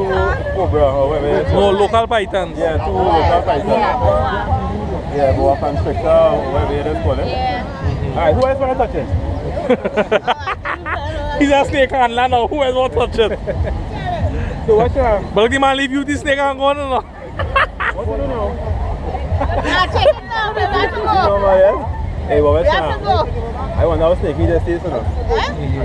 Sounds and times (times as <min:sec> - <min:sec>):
Outside, rural or natural: 0:00.0 - 0:25.8.